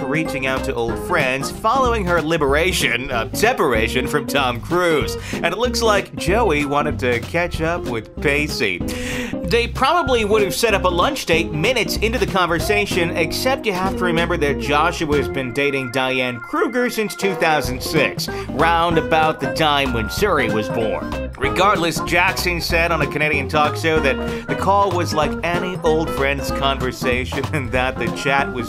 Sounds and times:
Music: 0.0 - 28.6
Speech: 0.0 - 28.6.

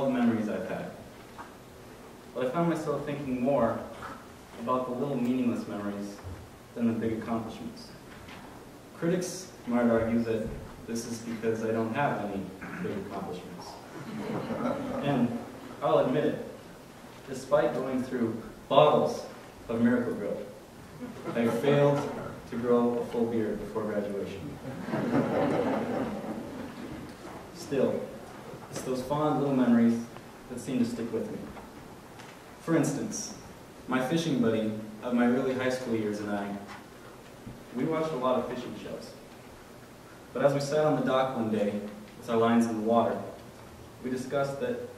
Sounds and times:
Male speech, man speaking: 0.0 - 1.0, 2.4 - 4.0, 4.6 - 6.2, 6.8 - 8.0, 9.0 - 13.8, 15.0 - 16.6, 17.3 - 20.6, 21.3 - 24.6, 27.6 - 31.6, 32.6 - 36.7, 37.8 - 39.2, 40.4 - 43.4, 44.0 - 44.9
Narration, monologue: 0.0 - 44.9.

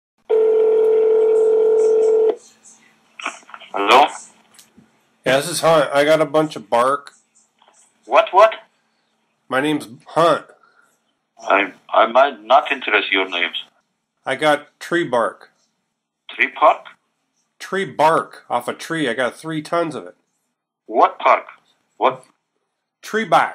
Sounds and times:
Radio: 1.8 - 4.4, 7.0 - 8.7, 11.4 - 13.8, 16.3 - 17.0, 20.9 - 21.6.

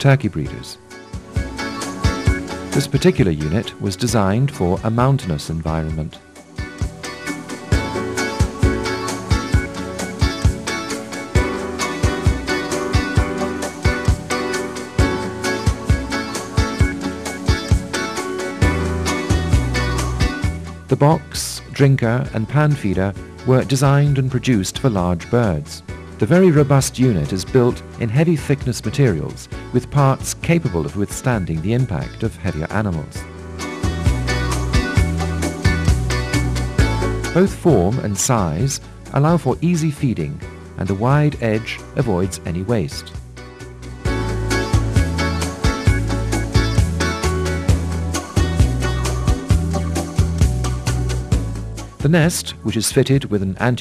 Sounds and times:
Speech: 0.0 - 0.8, 2.8 - 6.2, 20.9 - 33.2, 37.4 - 43.2, 52.0 - 53.8
Music: 0.0 - 53.8.

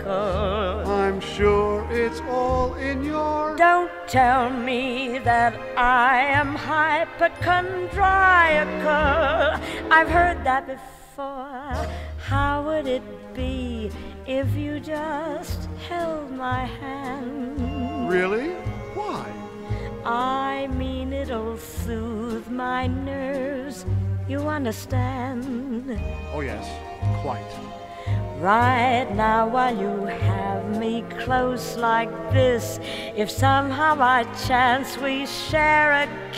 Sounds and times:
Female singing: 0.0 - 1.4, 2.8 - 18.0, 20.1 - 26.1, 28.4 - 36.3
Male singing: 0.0 - 3.8
Music: 0.0 - 36.3.

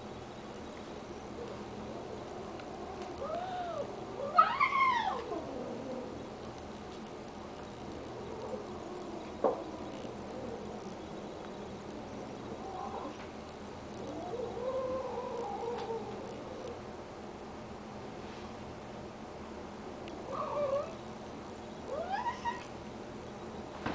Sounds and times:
Whimper (dog): 20.3 - 21.0, 21.9 - 22.7.

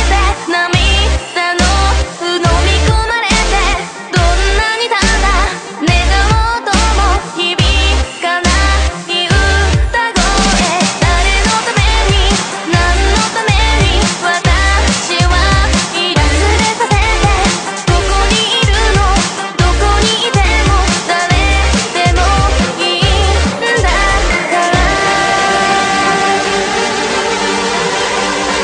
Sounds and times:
Dubstep: 0.0 - 28.6.

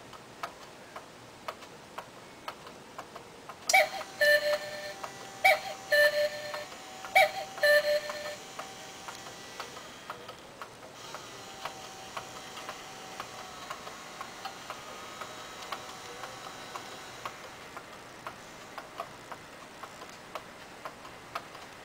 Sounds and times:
Tick-tock: 0.1 - 21.8.

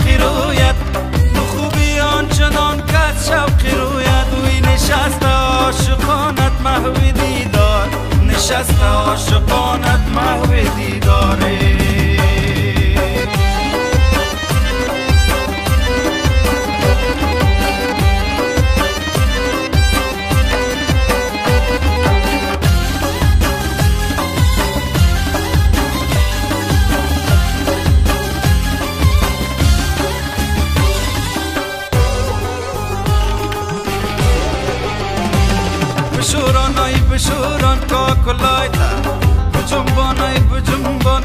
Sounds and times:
Singing: 0.0 - 13.4, 36.1 - 41.2
Music: 0.0 - 41.2.

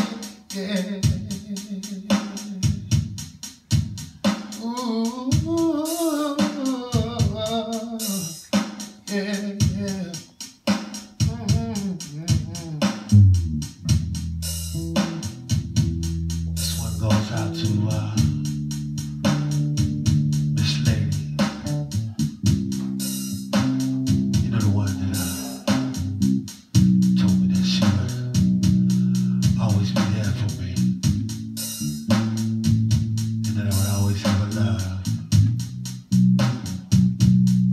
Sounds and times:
Music: 0.0 - 37.7.

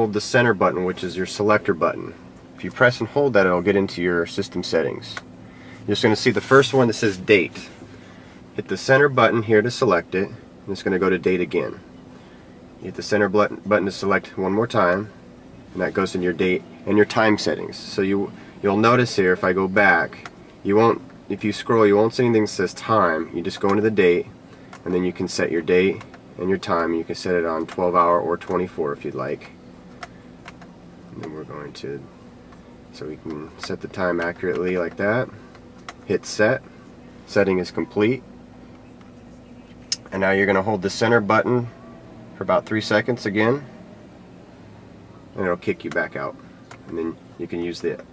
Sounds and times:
Speech: 0.0 - 5.3, 5.9 - 7.8, 8.6 - 11.8, 12.8 - 29.6, 31.1 - 32.1, 32.9 - 35.4, 36.0 - 38.2, 39.9 - 41.8, 42.4 - 43.7, 45.4 - 48.1.

